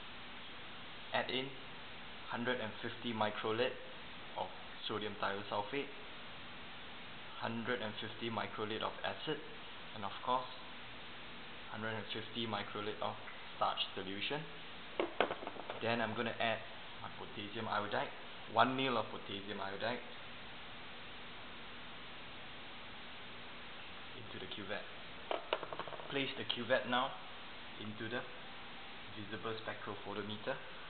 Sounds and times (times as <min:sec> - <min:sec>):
Speech: 0:01.1 - 0:01.6, 0:02.3 - 0:06.0, 0:07.3 - 0:10.7, 0:11.7 - 0:14.6, 0:15.8 - 0:20.1, 0:24.2 - 0:25.0, 0:26.1 - 0:28.4, 0:29.1 - 0:30.7.